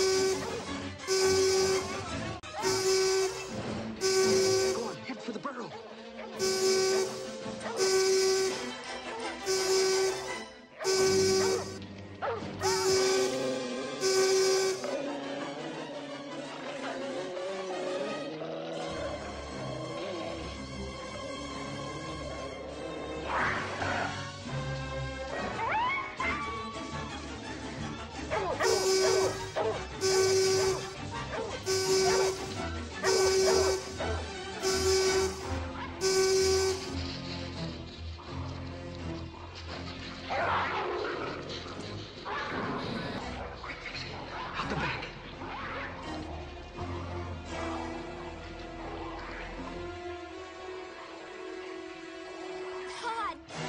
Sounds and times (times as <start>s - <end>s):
Music: 0.0s - 53.6s.